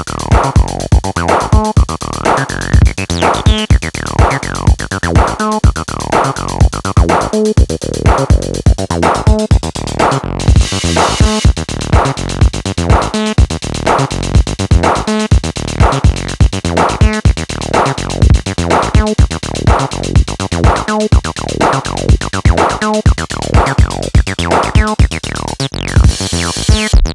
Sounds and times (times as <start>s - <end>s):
Drum machine: 0.0s - 27.1s.